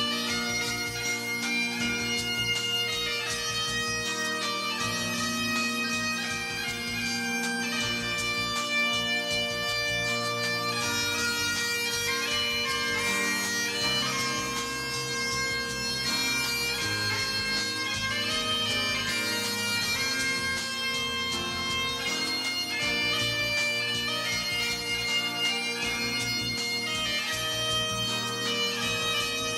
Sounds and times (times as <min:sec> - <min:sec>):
Bagpipes: 0:00.0 - 0:29.5.